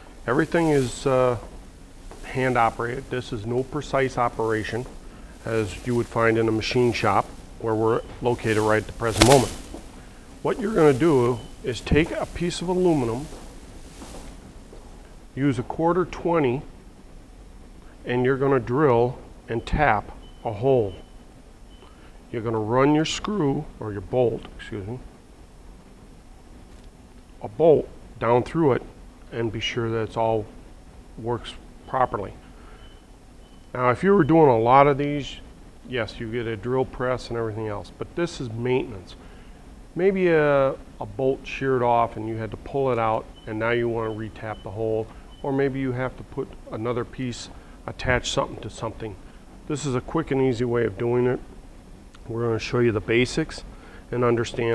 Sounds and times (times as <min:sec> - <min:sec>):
Speech: 0:00.2 - 0:01.5, 0:02.2 - 0:09.6, 0:10.4 - 0:13.3, 0:15.4 - 0:16.7, 0:18.0 - 0:21.0, 0:22.3 - 0:25.1, 0:27.4 - 0:30.5, 0:31.2 - 0:32.4, 0:33.7 - 0:39.2, 0:40.0 - 0:51.5, 0:52.2 - 0:54.7.